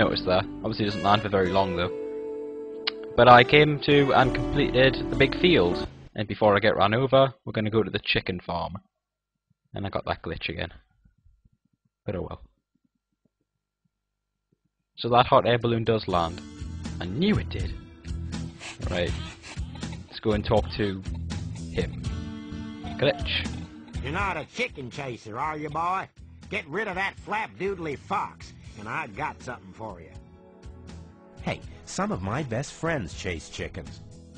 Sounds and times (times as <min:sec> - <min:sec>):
Speech: 0:00.0 - 0:01.9, 0:03.2 - 0:08.8, 0:09.8 - 0:10.8, 0:12.1 - 0:12.5, 0:15.0 - 0:16.4, 0:17.0 - 0:17.8, 0:18.8 - 0:19.3, 0:20.2 - 0:21.1, 0:22.9 - 0:30.2, 0:31.4 - 0:34.0
Music: 0:00.0 - 0:06.1, 0:15.6 - 0:34.3.